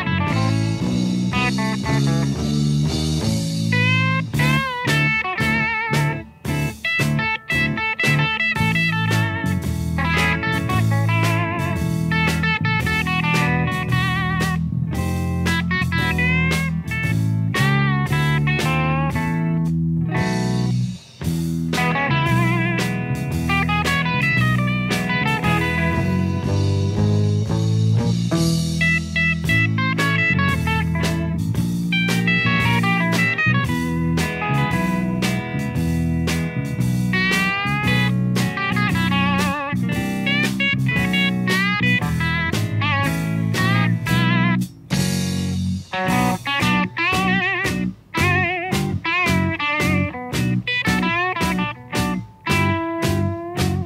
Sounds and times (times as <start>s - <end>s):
Bass guitar: 0.0s - 53.8s.